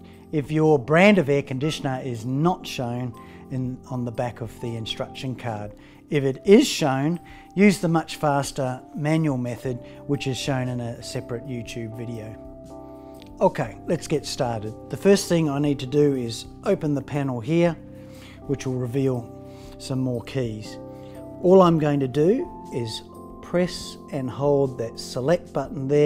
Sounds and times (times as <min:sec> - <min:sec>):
Music: 0:00.0 - 0:26.0
Speech: 0:00.4 - 0:12.4, 0:13.4 - 0:17.8, 0:18.5 - 0:20.8, 0:21.4 - 0:26.0.